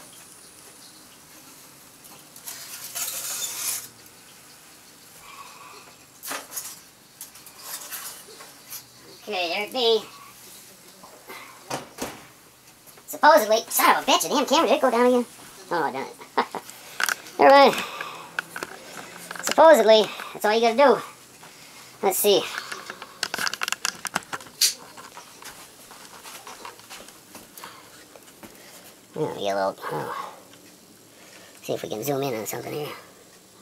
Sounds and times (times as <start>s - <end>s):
Speech: 9.2s - 10.1s, 13.1s - 16.2s, 17.4s - 17.8s, 19.4s - 21.1s, 22.0s - 22.6s, 29.2s - 30.3s, 31.6s - 33.1s.